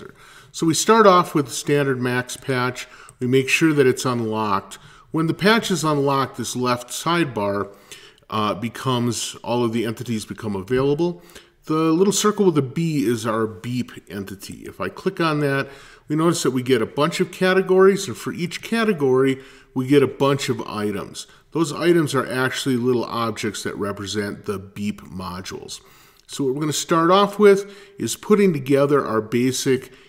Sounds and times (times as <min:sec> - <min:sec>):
Speech: 0:00.0 - 0:30.0.